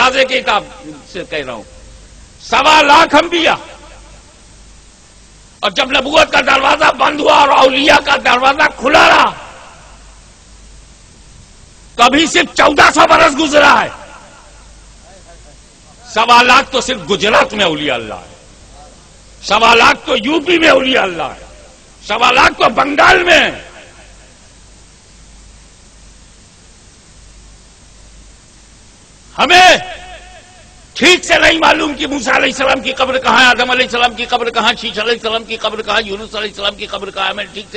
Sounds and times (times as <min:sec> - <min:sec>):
Speech: 0:00.0 - 0:01.7, 0:02.4 - 0:03.8, 0:05.6 - 0:09.5, 0:12.0 - 0:14.1, 0:15.0 - 0:23.8, 0:29.4 - 0:30.0, 0:31.0 - 0:37.7.